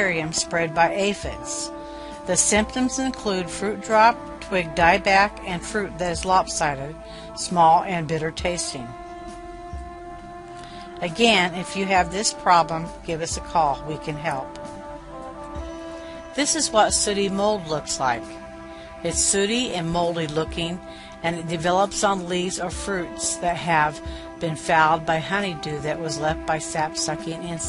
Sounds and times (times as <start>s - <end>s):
Speech: 0.0s - 1.7s, 2.3s - 9.0s, 11.0s - 14.6s, 16.4s - 18.4s, 19.0s - 27.6s
Music: 0.0s - 27.6s.